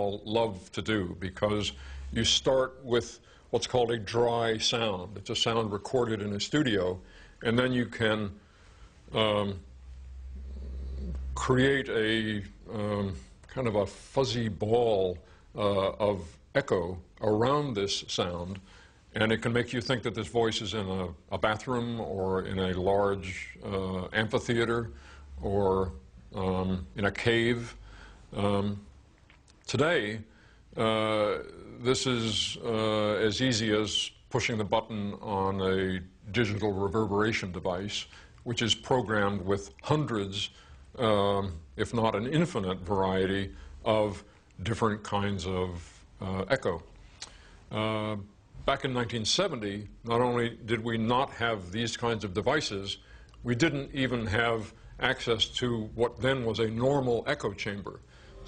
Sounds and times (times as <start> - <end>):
Speech: 0.0 - 8.4, 9.1 - 9.7, 10.9 - 28.9, 29.6 - 46.9, 47.7 - 58.4.